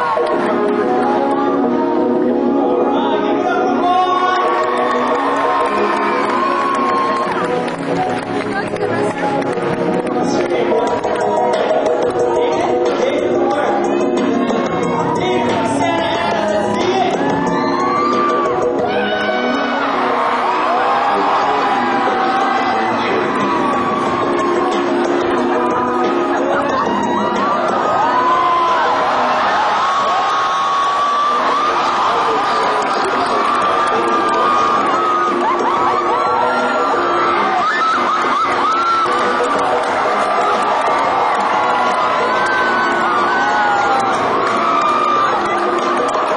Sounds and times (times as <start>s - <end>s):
Music: 0.0s - 46.3s
Speech: 15.2s - 17.2s.